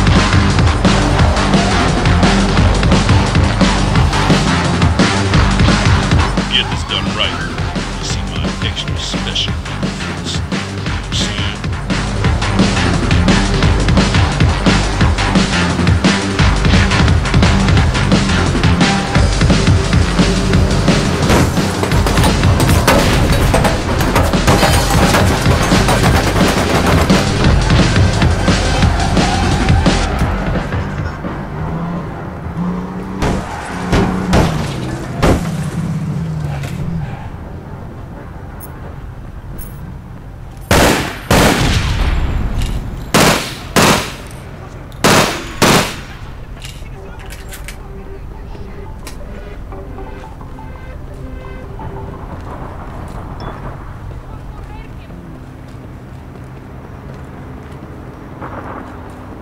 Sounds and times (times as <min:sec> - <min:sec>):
Music: 0:00.0 - 0:35.1, 0:44.9 - 0:55.1.